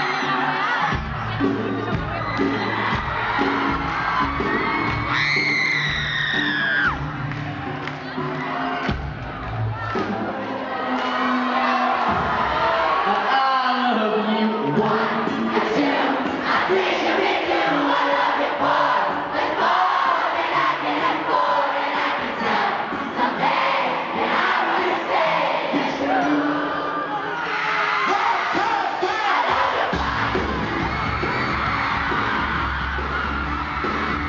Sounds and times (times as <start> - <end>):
Cheering: 0.0 - 34.2
Crowd: 0.0 - 34.2.